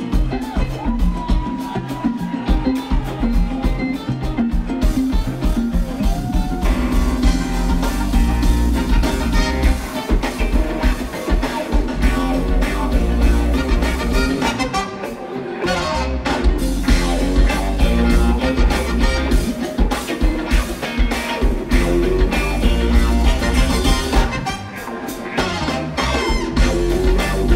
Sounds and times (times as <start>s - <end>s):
Jazz: 2.5s - 27.5s.